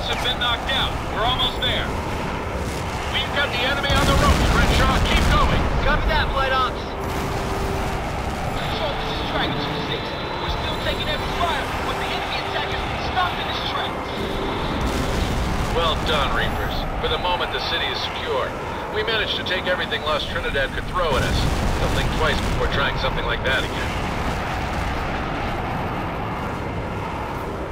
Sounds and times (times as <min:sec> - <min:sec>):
Speech: 0:15.8 - 0:23.8.